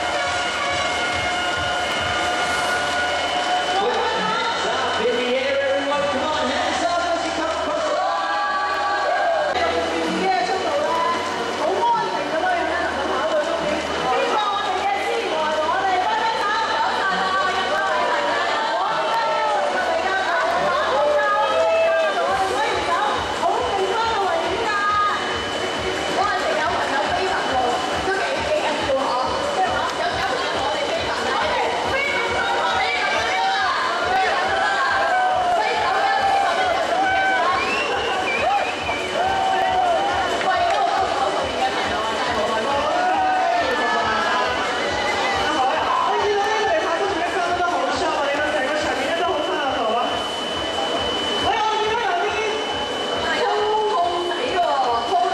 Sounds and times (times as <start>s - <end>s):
Chatter: 0.0s - 55.3s
Crowd: 0.0s - 55.3s
Speech: 3.8s - 55.3s.